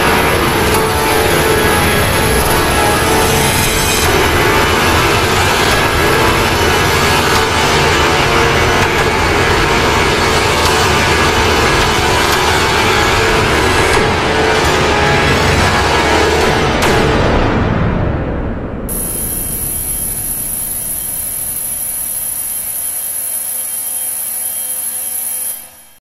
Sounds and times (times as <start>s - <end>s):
Music: 0.0s - 18.9s
Drill: 18.9s - 26.0s.